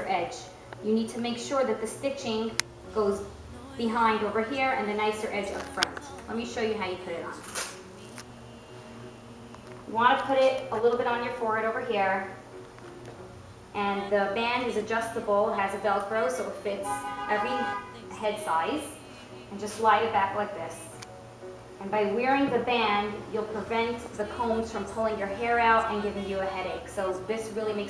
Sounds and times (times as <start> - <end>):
Speech: 0.0 - 7.4
Music: 0.0 - 27.9.